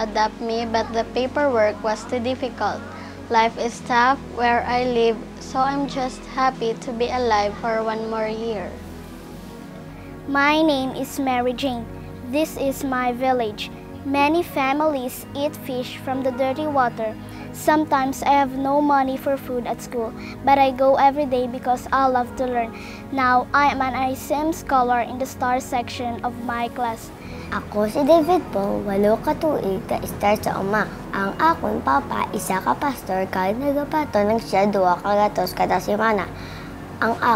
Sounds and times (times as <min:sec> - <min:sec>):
Speech: 0:00.0 - 0:08.8, 0:10.3 - 0:36.3, 0:37.0 - 0:37.3
Music: 0:00.0 - 0:37.3.